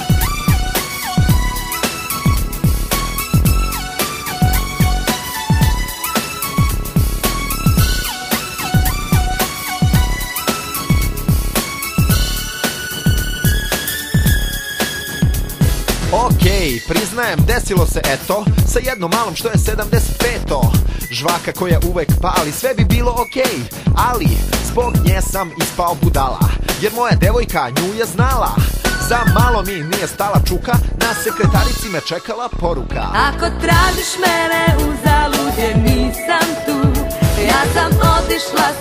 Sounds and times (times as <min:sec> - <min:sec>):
Music: 0:00.0 - 0:38.8.